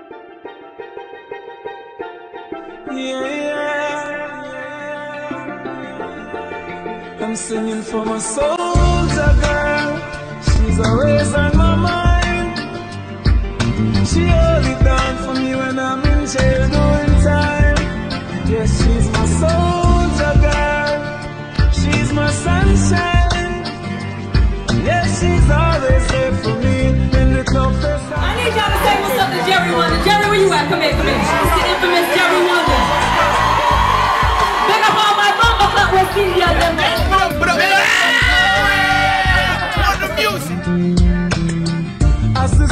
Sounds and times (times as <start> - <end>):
Music: 0.0 - 42.7
Speech: 28.2 - 32.8, 34.7 - 38.1, 39.5 - 40.6.